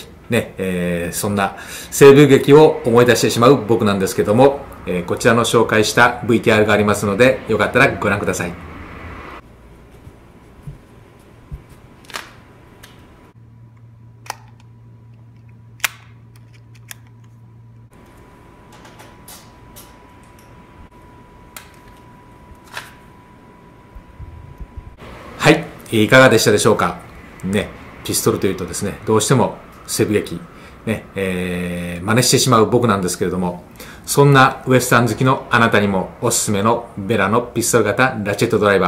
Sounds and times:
Speech: 0:00.0 - 0:08.6, 0:25.4 - 0:38.8.

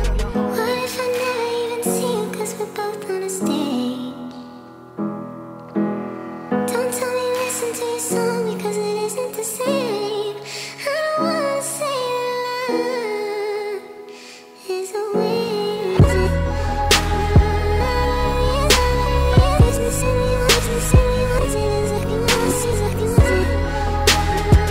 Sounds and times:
Music: 0:00.0 - 0:24.7.

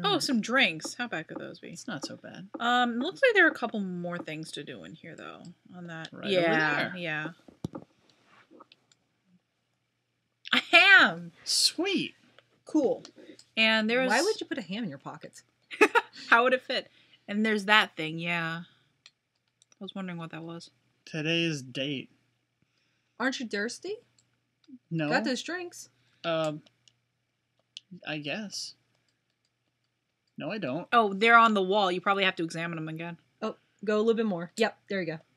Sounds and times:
Speech: 0:00.0 - 0:07.3, 0:10.5 - 0:12.1, 0:12.7 - 0:18.6, 0:19.8 - 0:22.0, 0:24.9 - 0:26.6, 0:27.9 - 0:28.7, 0:30.4 - 0:35.2.

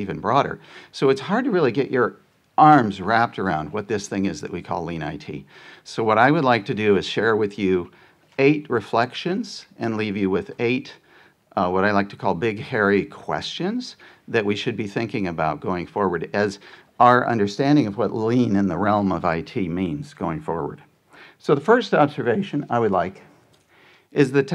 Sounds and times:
Speech: 0:00.0 - 0:23.3, 0:24.1 - 0:24.5.

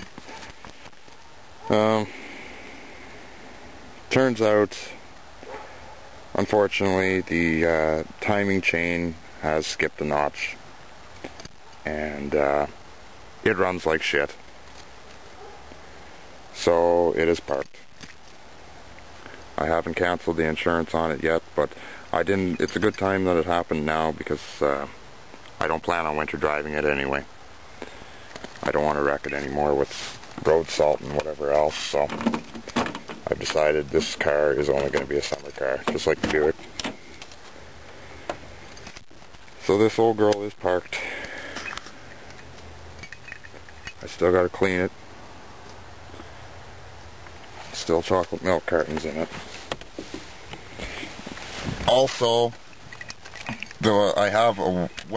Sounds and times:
Speech: 0:01.7 - 0:02.1, 0:04.1 - 0:05.0, 0:06.3 - 0:10.6, 0:11.9 - 0:12.8, 0:13.4 - 0:14.4, 0:16.5 - 0:17.8, 0:19.6 - 0:25.0, 0:25.6 - 0:27.3, 0:28.6 - 0:32.2, 0:33.2 - 0:36.6, 0:39.6 - 0:41.2, 0:44.0 - 0:44.9, 0:47.7 - 0:49.4, 0:51.8 - 0:52.6, 0:53.8 - 0:55.1.

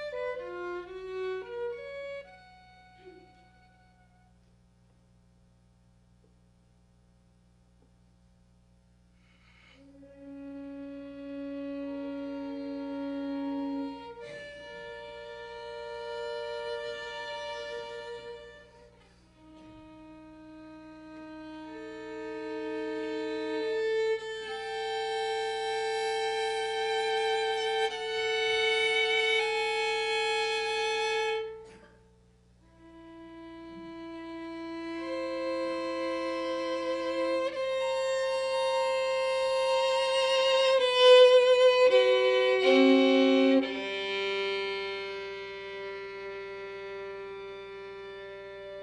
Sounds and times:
Violin, fiddle: 0:00.0 - 0:04.3, 0:09.6 - 0:31.9, 0:32.6 - 0:48.8.

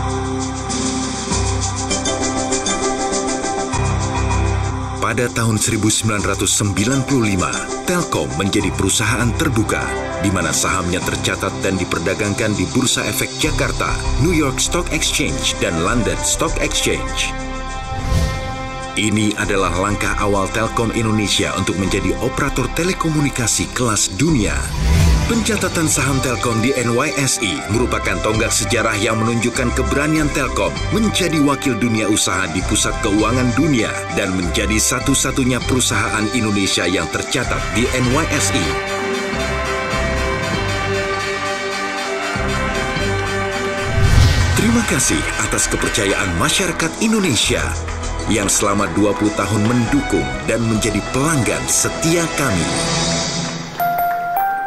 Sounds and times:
Music: 0:00.0 - 0:54.6
Speech: 0:05.0 - 0:17.4, 0:19.0 - 0:38.9, 0:44.6 - 0:52.8.

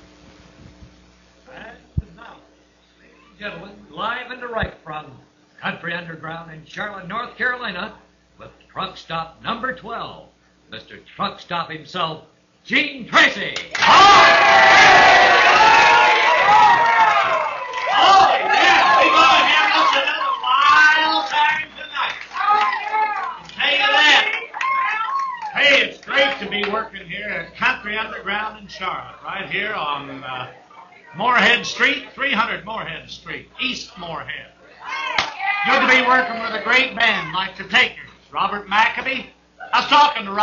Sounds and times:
Speech: 0:03.3 - 0:13.7, 0:25.6 - 0:34.5, 0:35.6 - 0:40.4.

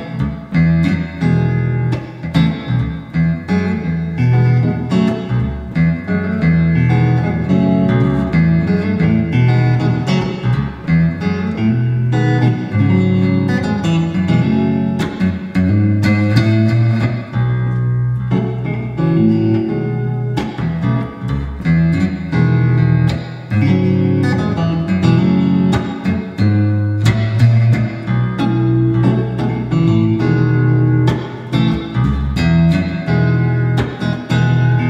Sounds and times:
Electric guitar: 0:00.0 - 0:34.9.

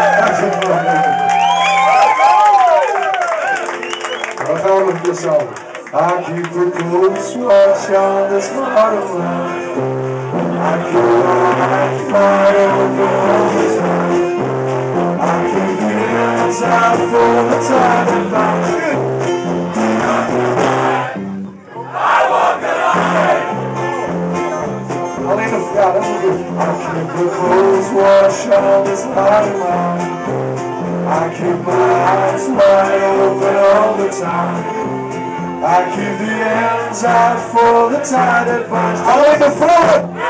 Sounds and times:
Music: 0:00.0 - 0:40.3.

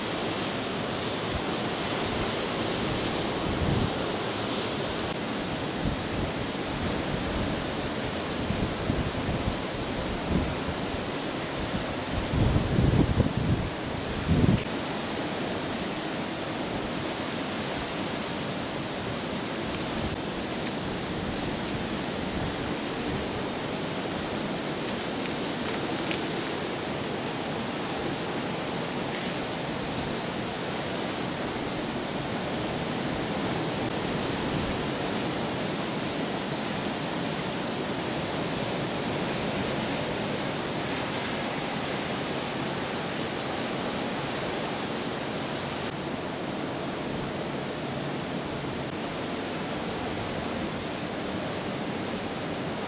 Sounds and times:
Outside, urban or manmade: 0:00.0 - 0:52.8
Pink noise: 0:00.0 - 0:52.8.

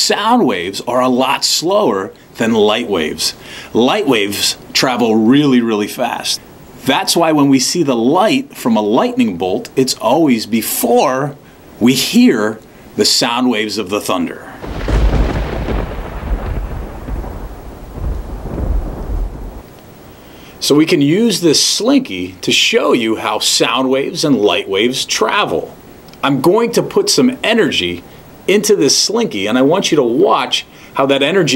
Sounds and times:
Speech: 0:00.0 - 0:14.6, 0:20.6 - 0:31.5.

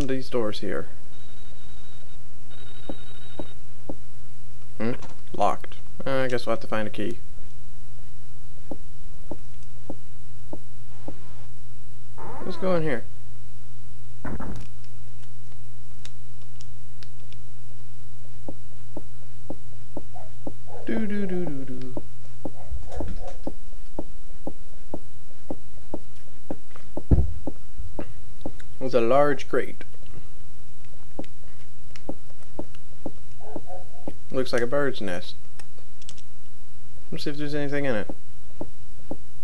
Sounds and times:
Speech: 0:00.0 - 0:01.0, 0:04.8 - 0:07.2, 0:12.4 - 0:13.1, 0:20.8 - 0:22.0, 0:28.8 - 0:29.9, 0:34.3 - 0:35.4, 0:37.1 - 0:38.2.

